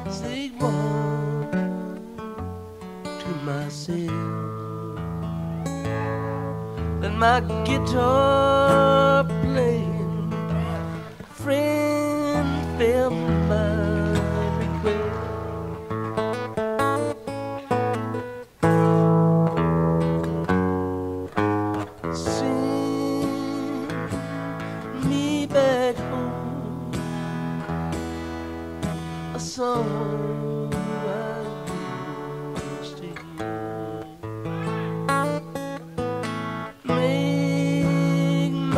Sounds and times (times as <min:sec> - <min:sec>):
Country: 0:00.0 - 0:38.7
Guitar: 0:00.0 - 0:38.7.